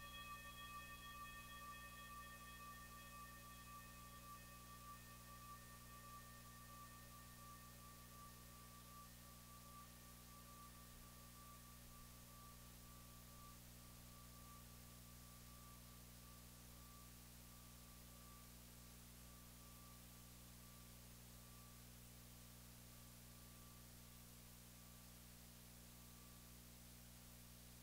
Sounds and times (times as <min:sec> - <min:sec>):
Music: 0:00.0 - 0:26.6.